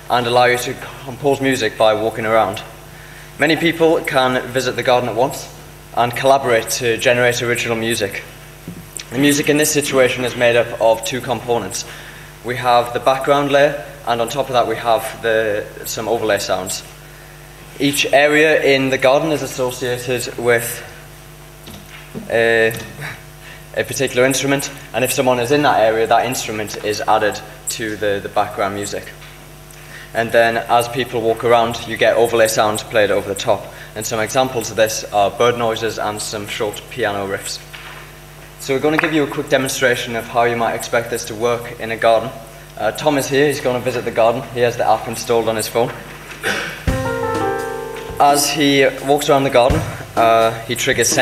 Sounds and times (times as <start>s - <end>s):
Speech: 0.0s - 2.8s, 3.4s - 8.4s, 9.0s - 17.0s, 17.8s - 21.0s, 21.7s - 29.2s, 30.1s - 37.7s, 38.6s - 46.0s, 48.2s - 51.2s.